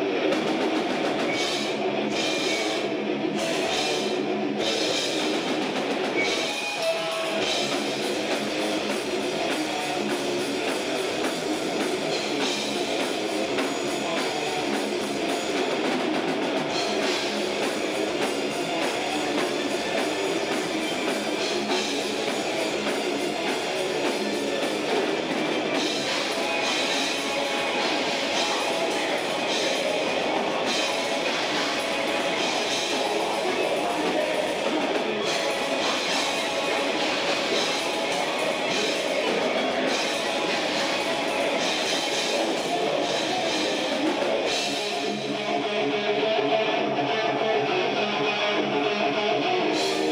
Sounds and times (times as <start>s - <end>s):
Music: 0.0s - 50.1s.